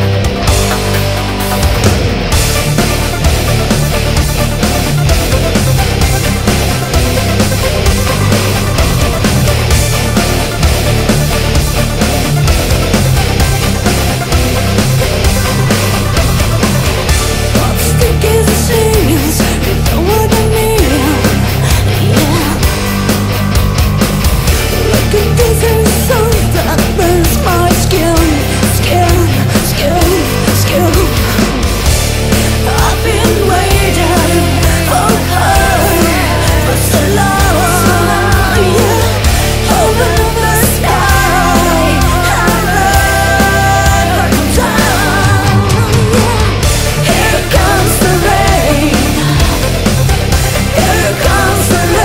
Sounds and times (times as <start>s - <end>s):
Music: 0.0s - 52.0s.